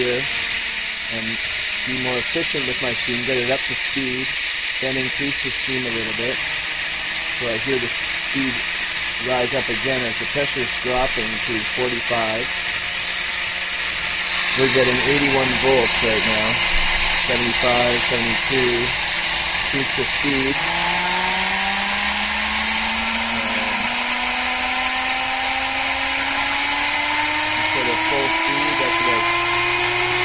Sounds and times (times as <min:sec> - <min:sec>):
Speech: 0:00.0 - 0:00.3, 0:01.1 - 0:06.4, 0:07.4 - 0:08.6, 0:09.2 - 0:12.5, 0:14.6 - 0:16.6, 0:17.3 - 0:19.0, 0:19.8 - 0:20.8, 0:27.7 - 0:29.3.